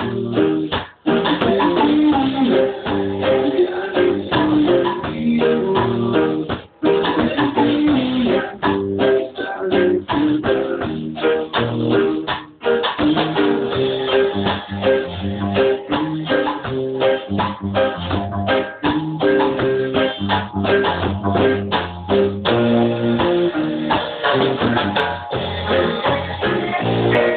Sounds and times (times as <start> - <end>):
Drum: 0.0 - 27.3
Drum kit: 0.0 - 27.3
Maraca: 0.0 - 27.3.